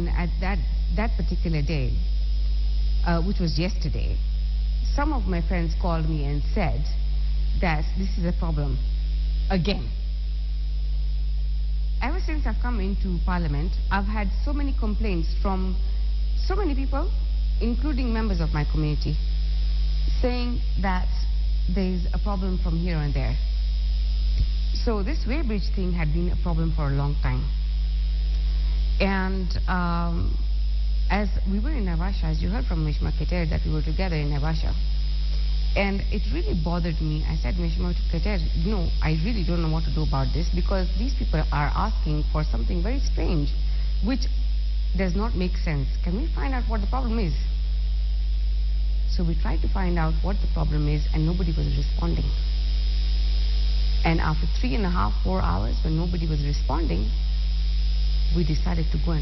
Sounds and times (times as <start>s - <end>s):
Speech: 0.0s - 2.0s, 3.1s - 4.2s, 4.9s - 7.0s, 7.6s - 8.8s, 9.5s - 10.0s, 12.0s - 15.8s, 16.4s - 19.2s, 20.1s - 23.4s, 24.8s - 27.5s, 29.0s - 30.4s, 31.1s - 34.8s, 35.8s - 44.3s, 45.0s - 47.5s, 49.1s - 52.4s, 54.1s - 57.2s, 58.3s - 59.2s.